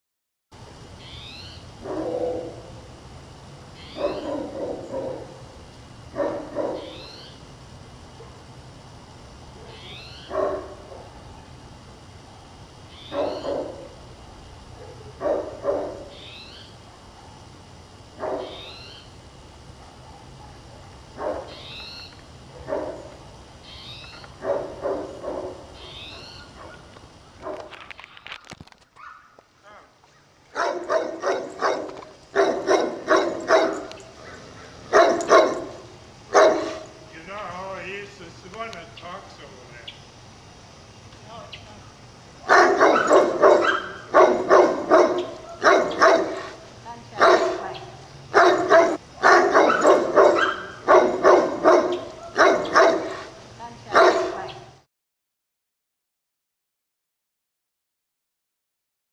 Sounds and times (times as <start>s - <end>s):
Bow-wow: 1.8s - 2.7s, 4.0s - 5.3s, 6.2s - 7.0s, 9.6s - 11.1s, 13.1s - 13.9s, 14.8s - 16.1s, 18.2s - 18.6s, 19.8s - 21.6s, 24.4s - 25.6s, 30.6s - 35.7s, 36.4s - 36.8s, 42.5s - 46.6s, 47.2s - 53.3s, 53.9s - 54.6s
Yip: 3.8s - 5.3s, 6.2s - 7.3s, 13.0s - 13.8s, 18.2s - 18.7s, 30.6s - 35.7s, 36.4s - 36.8s, 42.5s - 46.6s, 47.2s - 53.3s, 53.9s - 54.6s
Speech: 37.1s - 39.9s, 53.6s - 54.6s.